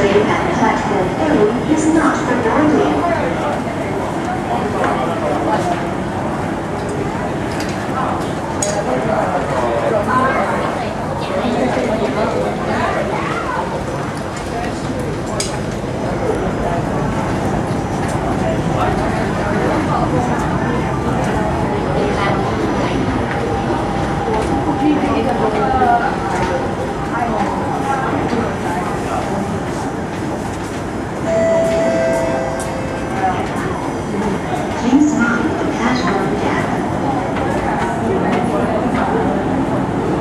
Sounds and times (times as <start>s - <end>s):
Subway, metro, underground: 0.0s - 40.2s
Train: 0.0s - 40.2s.